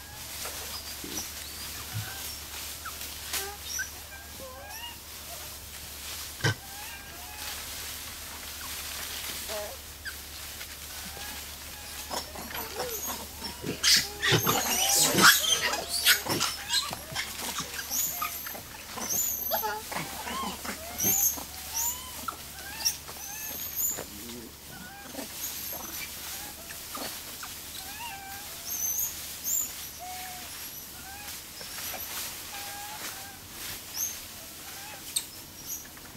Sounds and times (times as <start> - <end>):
Wild animals: 0.0 - 35.9.